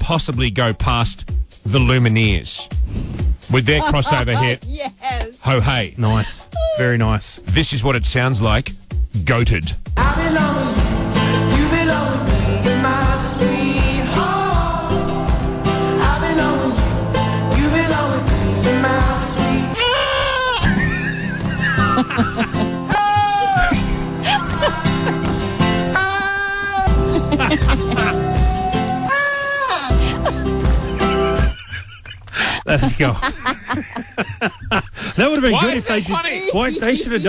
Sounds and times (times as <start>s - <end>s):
Speech: 0.0s - 2.6s, 3.5s - 9.8s, 32.7s - 33.3s, 35.2s - 37.2s
Music: 0.0s - 19.8s, 20.6s - 37.2s.